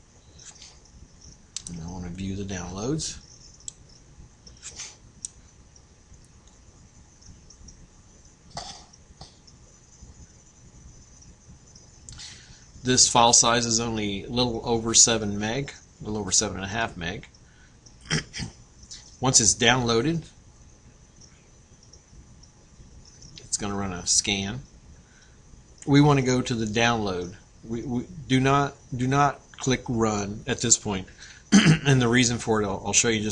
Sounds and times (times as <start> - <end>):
Inside, small room: 0.0 - 33.3
Speech: 1.6 - 3.2, 12.8 - 17.3, 19.2 - 20.4, 23.4 - 24.7, 25.8 - 33.3.